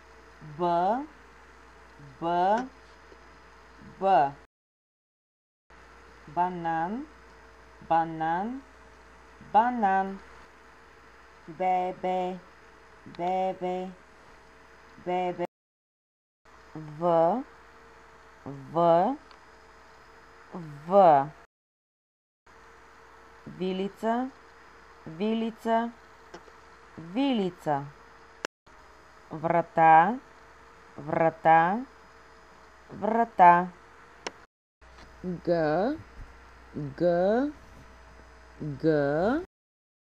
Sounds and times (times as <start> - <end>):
Speech: 0.4 - 1.1, 2.0 - 2.8, 3.8 - 4.5, 6.3 - 7.1, 7.8 - 8.7, 9.4 - 10.2, 11.5 - 12.4, 13.1 - 14.0, 15.0 - 15.5, 16.8 - 17.5, 18.5 - 19.2, 20.6 - 21.4, 23.5 - 24.4, 25.1 - 26.0, 27.0 - 28.0, 29.3 - 30.2, 31.0 - 31.9, 32.9 - 33.8, 35.2 - 36.1, 36.8 - 37.6, 38.6 - 39.5.